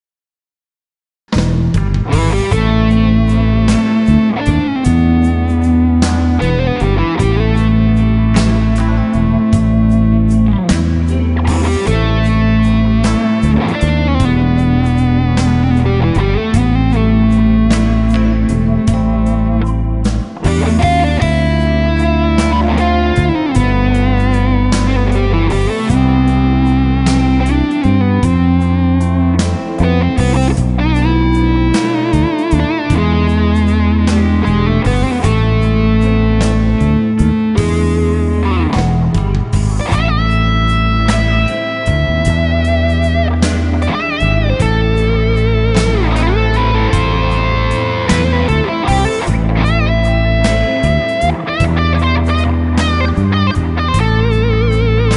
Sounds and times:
Guitar: 1.3s - 55.1s
Inside, small room: 1.3s - 55.1s.

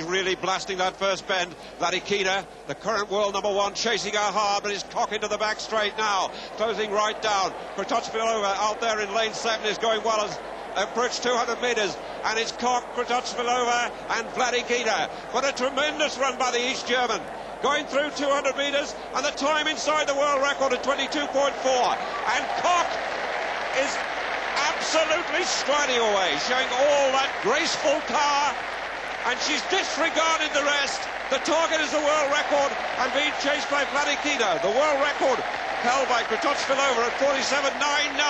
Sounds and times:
Speech: 0.0s - 23.0s, 23.8s - 24.0s, 24.6s - 28.6s, 29.2s - 38.3s
Inside, public space: 0.0s - 38.3s.

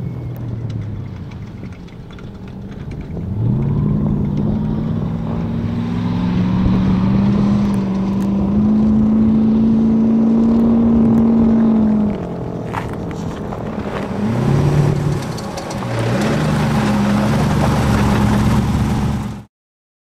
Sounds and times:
Car: 0.0s - 19.5s.

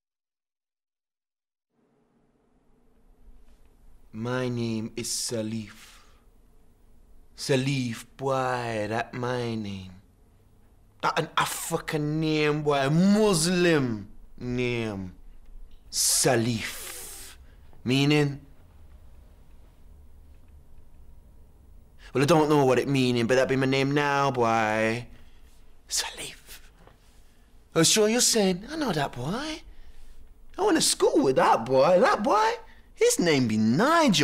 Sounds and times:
Speech: 4.1s - 6.0s, 7.4s - 10.1s, 11.0s - 15.2s, 15.9s - 18.5s, 22.0s - 25.1s, 25.9s - 26.7s, 27.7s - 29.7s, 30.6s - 34.2s.

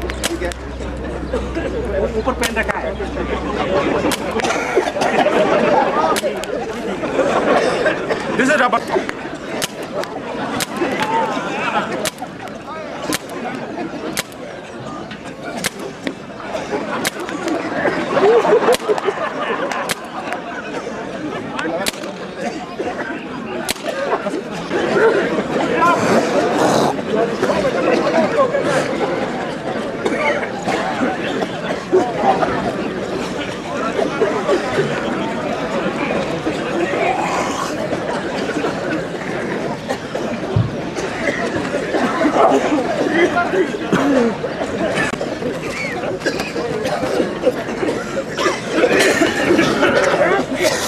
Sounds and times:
Chatter: 0.0s - 50.8s
Outside, urban or manmade: 0.0s - 50.8s
Speech: 0.0s - 50.8s.

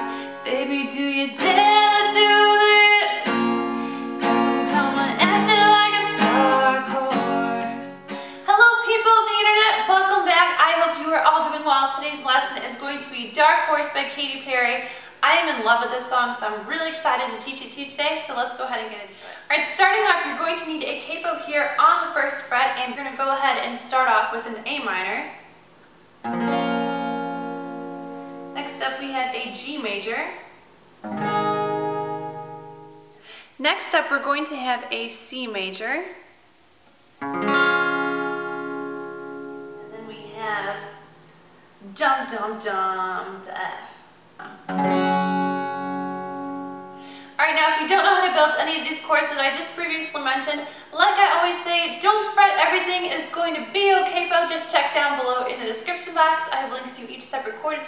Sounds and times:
Strum: 0.0s - 8.6s, 31.0s - 33.3s, 37.2s - 42.0s, 44.4s - 47.2s
Speech: 8.5s - 25.4s, 28.6s - 30.5s, 33.6s - 36.3s, 39.9s - 41.0s, 41.8s - 44.6s, 47.4s - 57.8s.

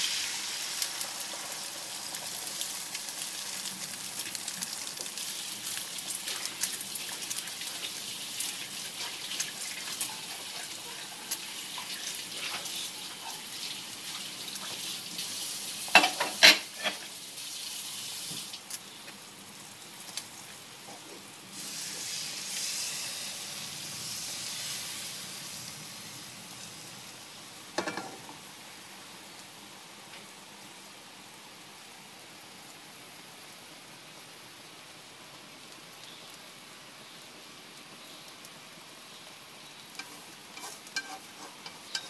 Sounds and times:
Sizzle: 0.0s - 42.1s.

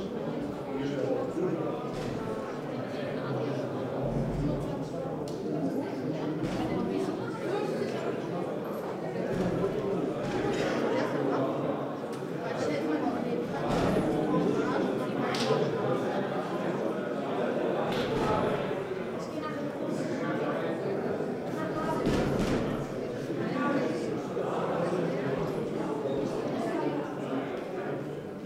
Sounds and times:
Crowd: 0.0s - 28.4s
Speech: 0.0s - 28.4s.

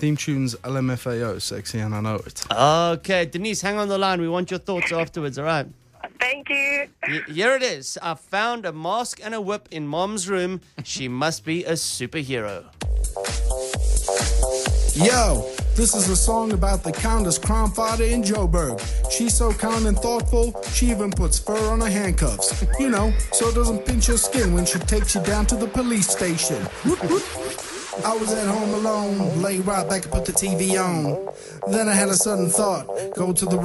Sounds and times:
Speech: 0.0s - 12.7s, 15.0s - 26.7s, 28.0s - 33.6s.

